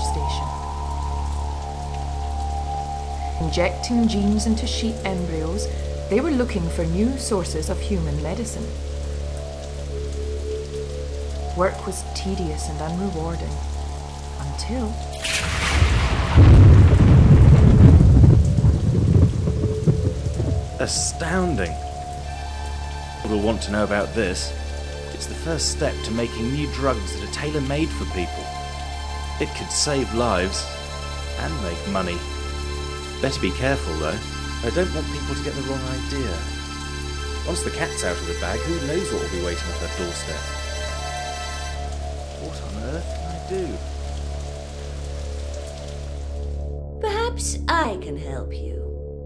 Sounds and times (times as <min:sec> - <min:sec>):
Speech: 0:00.0 - 0:00.5, 0:03.4 - 0:08.7, 0:11.6 - 0:13.6, 0:14.4 - 0:15.0, 0:20.8 - 0:21.8, 0:23.2 - 0:24.5, 0:25.2 - 0:28.5, 0:29.4 - 0:30.7, 0:31.4 - 0:32.2, 0:33.2 - 0:36.4, 0:37.5 - 0:40.4, 0:42.4 - 0:43.8, 0:47.0 - 0:48.9.